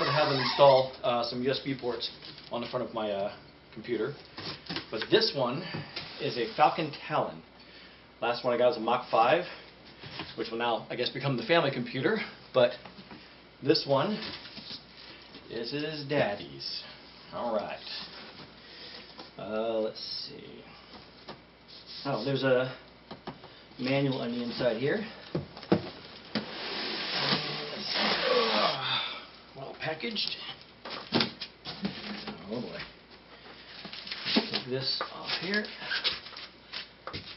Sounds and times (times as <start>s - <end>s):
Speech: 0.0s - 4.2s, 4.9s - 7.4s, 8.2s - 9.6s, 10.4s - 12.8s, 13.6s - 14.3s, 15.5s - 18.1s, 19.4s - 20.8s, 22.0s - 22.8s, 23.8s - 25.2s, 27.2s - 29.0s, 29.6s - 30.6s, 32.2s - 33.0s, 34.5s - 35.8s
Inside, small room: 0.0s - 37.3s.